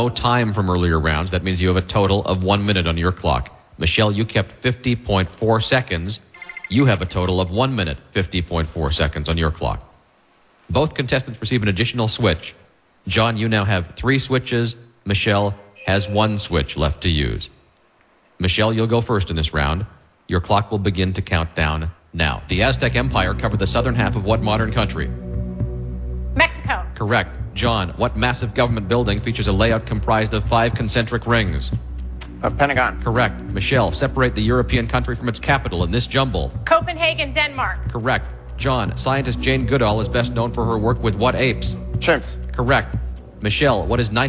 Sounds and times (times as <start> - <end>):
Speech: 0.0 - 9.9, 10.7 - 17.6, 18.4 - 25.1, 26.4 - 31.8, 32.4 - 44.2
Music: 15.8 - 16.5, 22.5 - 44.2.